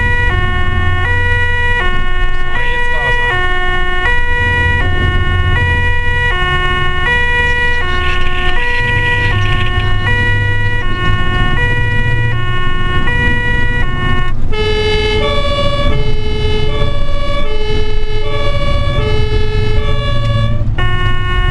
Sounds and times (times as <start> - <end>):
Ambulance (siren): 0.0 - 21.5.